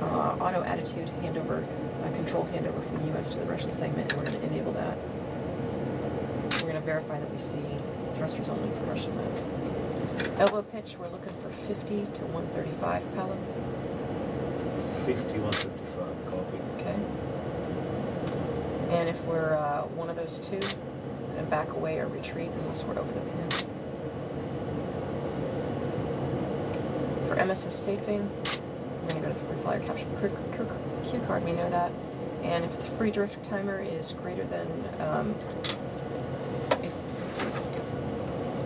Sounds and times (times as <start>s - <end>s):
Speech: 0.0s - 5.0s, 6.6s - 9.4s, 10.4s - 13.5s, 15.0s - 17.1s, 18.9s - 20.8s, 21.4s - 23.6s, 27.3s - 28.4s, 29.0s - 35.5s.